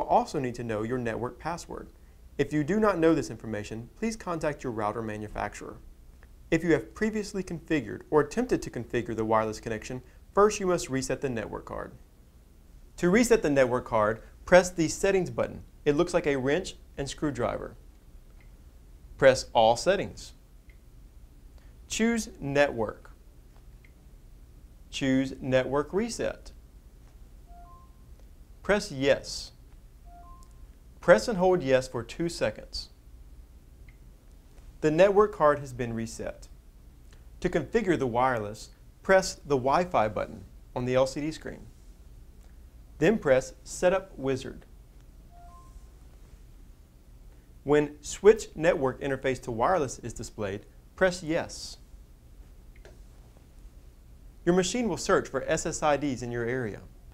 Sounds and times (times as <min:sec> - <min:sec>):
Speech: 0:00.0 - 0:05.8, 0:06.5 - 0:12.0, 0:13.0 - 0:17.8, 0:19.2 - 0:20.4, 0:21.9 - 0:23.2, 0:24.9 - 0:26.6, 0:28.6 - 0:29.6, 0:31.0 - 0:33.0, 0:34.8 - 0:36.5, 0:37.4 - 0:41.7, 0:43.0 - 0:44.7, 0:47.6 - 0:51.9, 0:54.4 - 0:56.9.